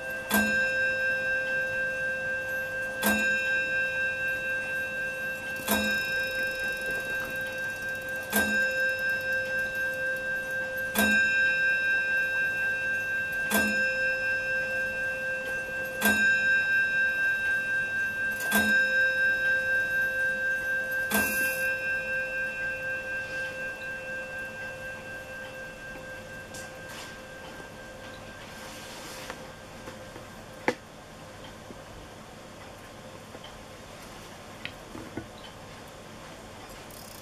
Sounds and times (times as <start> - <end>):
Tick-tock: 2.5 - 3.6, 4.5 - 13.9, 14.7 - 21.8.